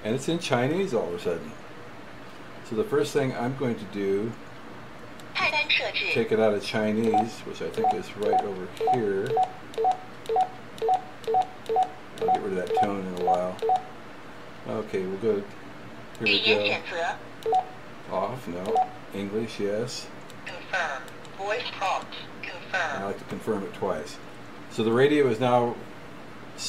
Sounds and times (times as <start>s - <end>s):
Speech: 0.0s - 1.6s, 2.7s - 4.4s, 5.4s - 9.3s, 12.4s - 13.6s, 14.7s - 15.5s, 16.2s - 17.2s, 18.1s - 25.8s.